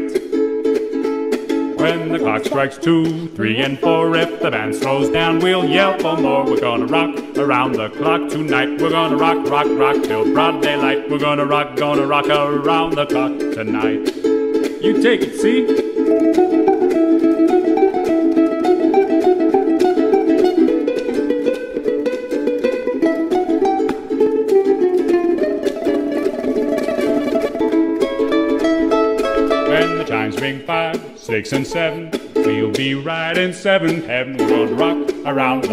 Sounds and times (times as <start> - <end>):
Music: 0.0 - 35.7.